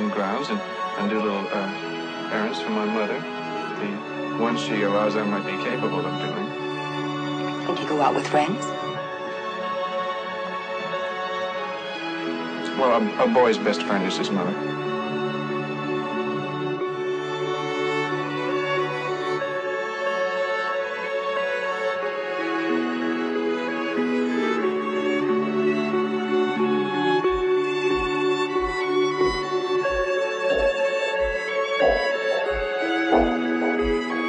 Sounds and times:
Tender music: 0.0s - 34.2s.

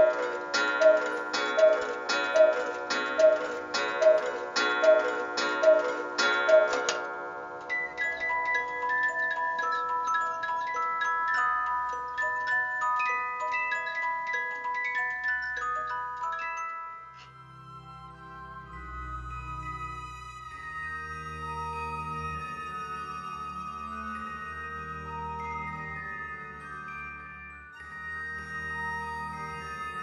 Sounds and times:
Chime: 0.0s - 30.0s.

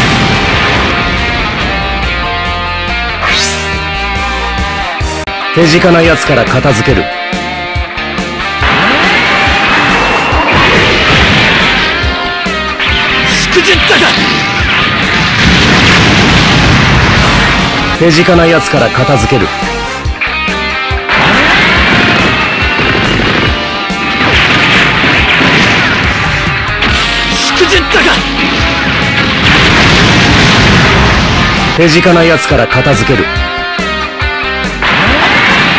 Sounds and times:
Music: 0.0s - 35.7s
Speech: 5.6s - 7.1s, 13.3s - 14.2s, 18.0s - 19.6s, 27.4s - 28.2s, 31.8s - 33.3s.

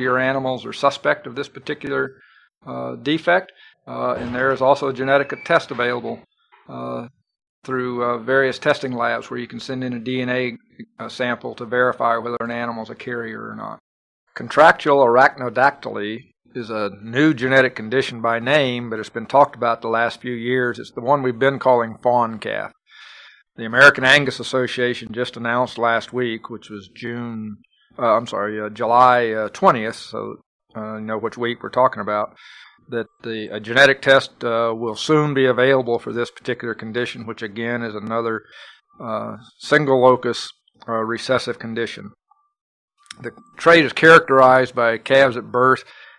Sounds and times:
Speech: 0.0s - 7.1s, 7.7s - 13.8s, 14.4s - 42.2s, 43.1s - 46.0s.

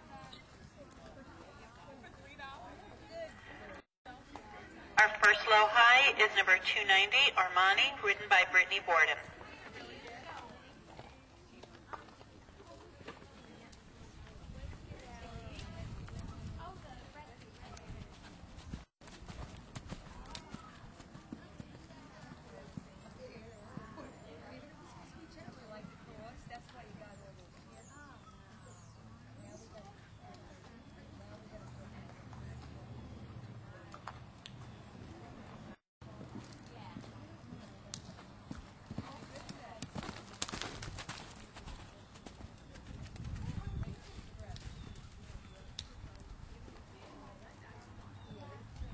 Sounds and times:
Clip-clop: 0.0s - 4.6s, 9.2s - 48.9s.

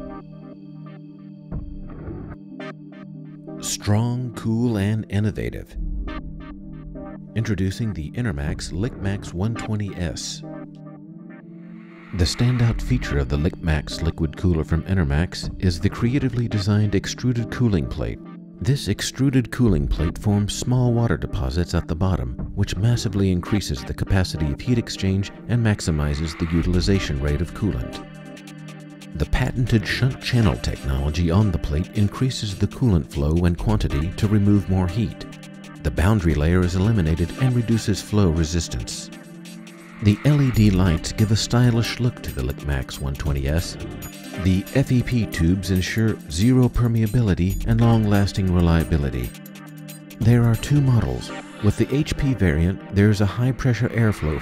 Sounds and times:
Music: 0.0s - 54.4s
Speech: 3.6s - 5.8s, 7.4s - 10.5s, 12.2s - 28.0s, 29.2s - 39.1s, 40.0s - 43.8s, 44.4s - 49.3s, 50.2s - 54.4s.

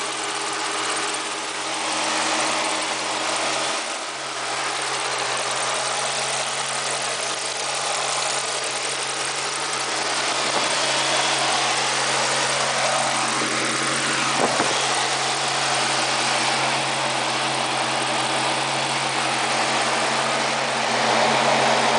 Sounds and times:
Outside, urban or manmade: 0.0s - 21.9s
Vehicle: 0.0s - 21.9s.

